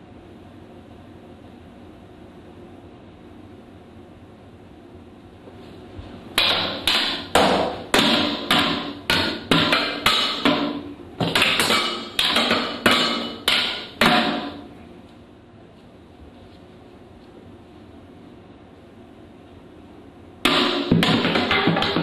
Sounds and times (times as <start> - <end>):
Inside, small room: 0.0 - 22.0.